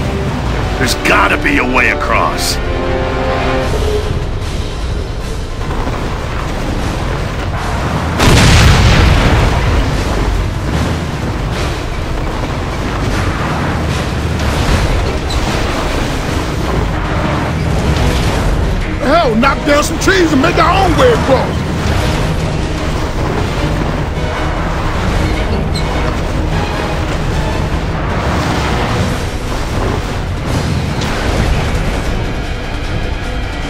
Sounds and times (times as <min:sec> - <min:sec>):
Music: 0:00.0 - 0:33.6.